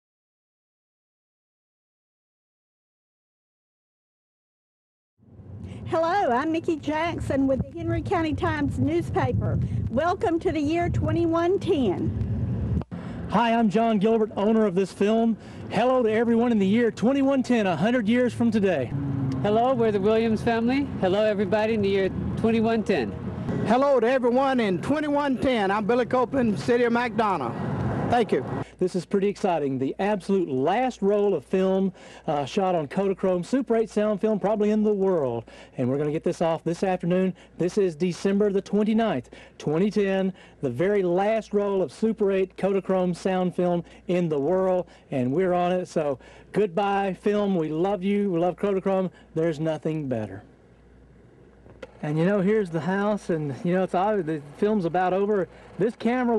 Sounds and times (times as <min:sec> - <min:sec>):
Speech: 0:13.3 - 0:50.4, 0:52.0 - 0:56.3.